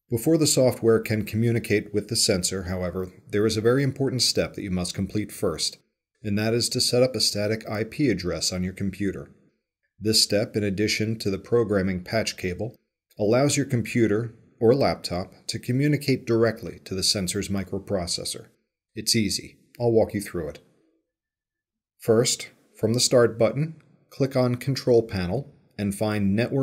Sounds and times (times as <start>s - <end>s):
Speech: 0.1s - 9.3s, 10.0s - 20.6s, 22.0s - 26.6s.